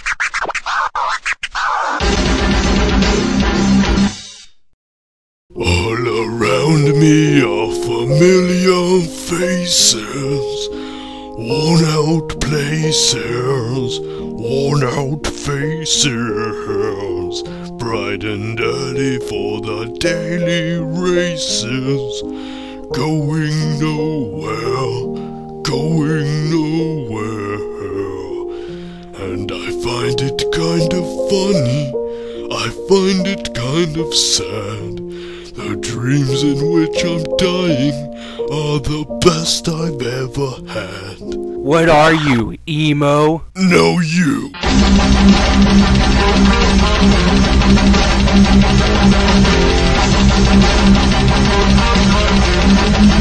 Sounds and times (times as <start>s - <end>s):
Music: 1.5s - 4.3s, 5.5s - 42.5s, 43.8s - 53.2s.